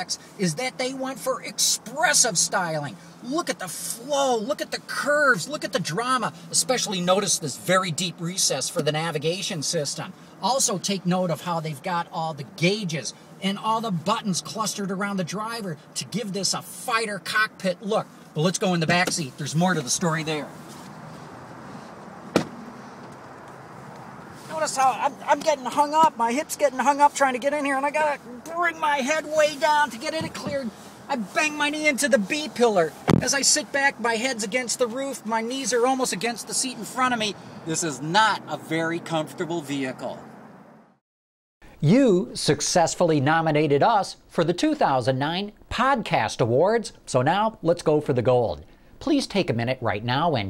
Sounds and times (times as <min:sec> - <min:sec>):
Speech: 0:00.0 - 0:20.5, 0:24.5 - 0:40.2, 0:41.8 - 0:50.5.